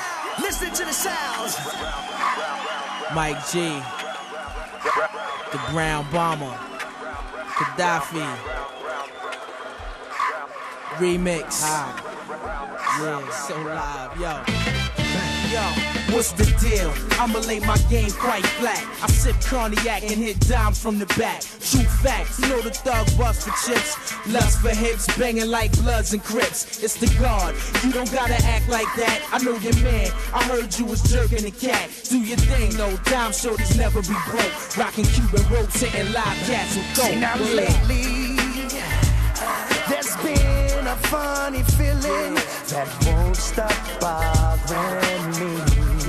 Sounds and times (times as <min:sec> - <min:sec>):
Rapping: 0:00.0 - 0:09.4, 0:10.0 - 0:46.0
Music: 0:00.0 - 0:46.0.